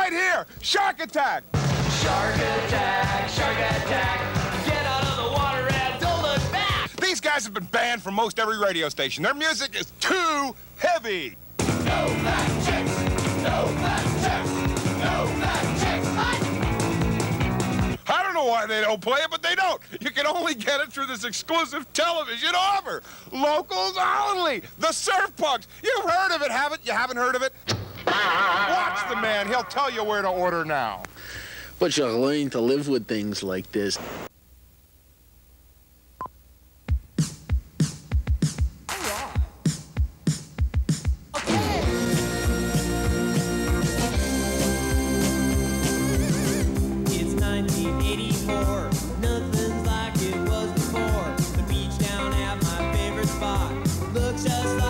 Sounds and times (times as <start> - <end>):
Speech: 0.0 - 1.4, 6.6 - 11.4, 18.0 - 27.6, 28.4 - 31.1, 31.8 - 34.0
Music: 1.5 - 6.9, 11.6 - 18.0, 36.9 - 54.8.